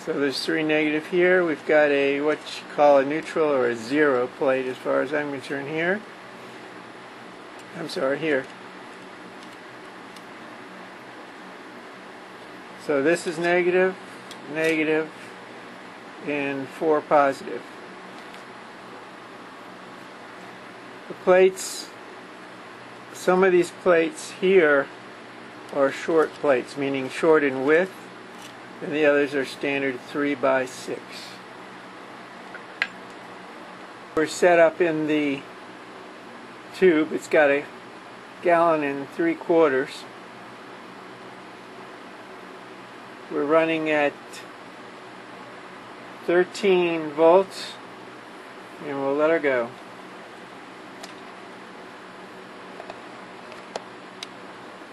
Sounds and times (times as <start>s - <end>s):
Speech: 0.0s - 6.1s, 7.7s - 8.5s, 12.8s - 15.2s, 16.2s - 17.7s, 21.1s - 22.0s, 23.2s - 24.9s, 25.7s - 28.0s, 28.8s - 31.4s, 34.2s - 35.5s, 36.7s - 37.7s, 38.4s - 40.1s, 43.3s - 44.5s, 46.2s - 47.8s, 48.8s - 49.8s.